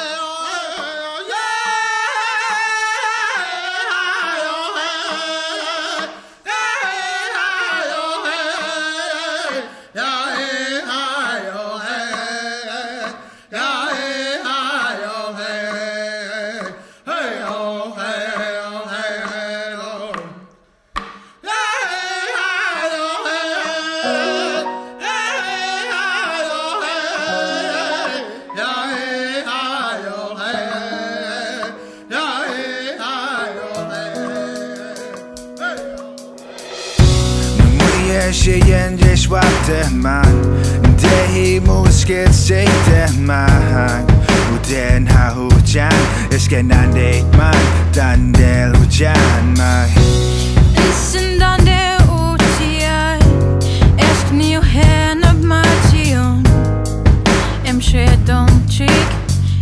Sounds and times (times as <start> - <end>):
Music: 22.8 - 59.6.